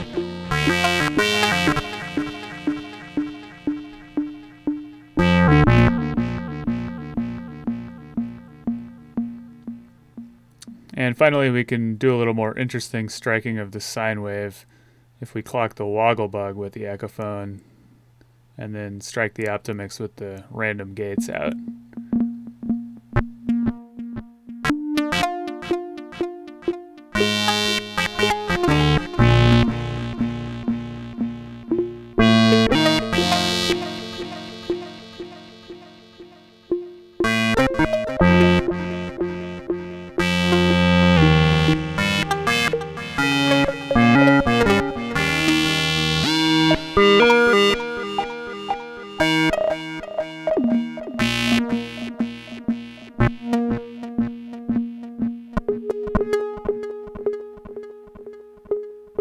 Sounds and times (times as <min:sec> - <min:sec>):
Synthesizer: 0:00.0 - 0:10.9, 0:21.2 - 0:59.2.